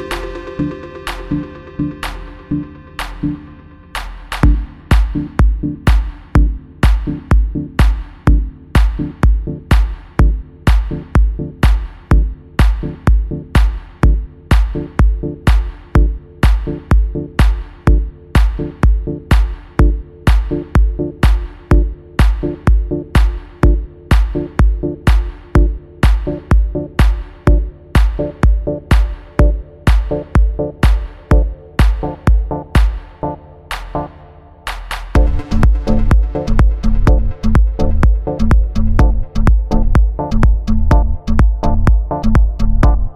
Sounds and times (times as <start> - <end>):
Music: 0.0 - 43.1.